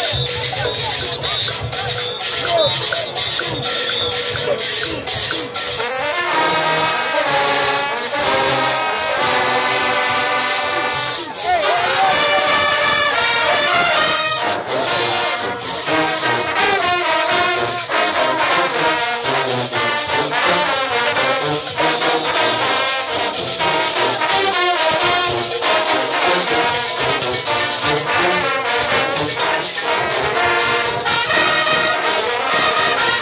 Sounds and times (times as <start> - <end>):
Speech: 0.0 - 3.3, 10.8 - 15.4.